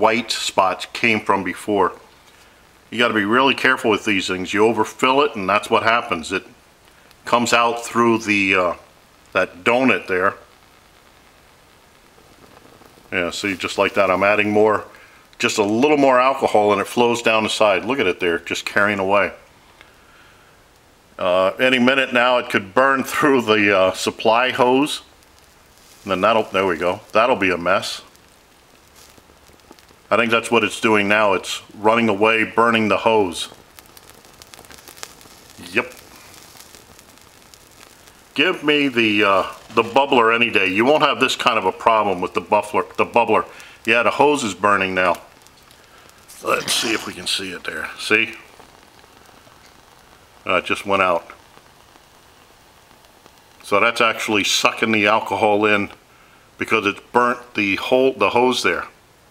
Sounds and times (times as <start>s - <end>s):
Speech: 0.0s - 2.0s, 2.9s - 6.6s, 7.3s - 10.5s, 13.1s - 19.4s, 21.2s - 25.1s, 26.1s - 28.1s, 30.1s - 33.6s, 35.6s - 36.0s, 38.4s - 45.3s, 46.3s - 48.5s, 50.5s - 51.4s, 53.6s - 56.0s, 56.6s - 59.0s
Boiling: 0.0s - 59.3s.